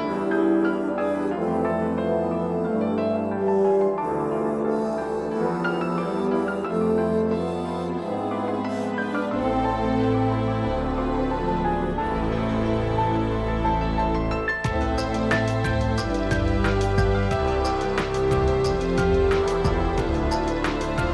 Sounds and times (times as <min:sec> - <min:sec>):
Music: 0:00.0 - 0:21.1.